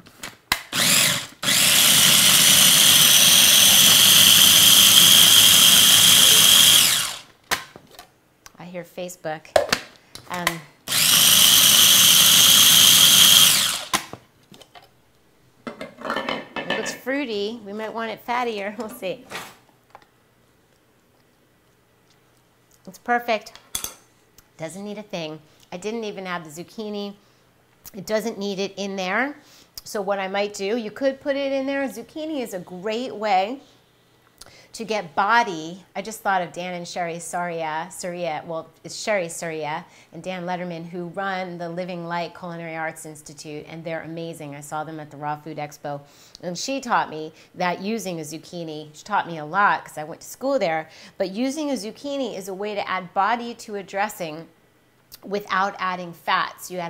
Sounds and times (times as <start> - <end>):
Inside, small room: 0.0 - 56.8
Speech: 8.5 - 9.6, 10.3 - 10.7, 16.7 - 19.4, 22.8 - 23.6, 24.6 - 27.2, 27.9 - 33.7, 34.8 - 54.5, 55.2 - 56.8.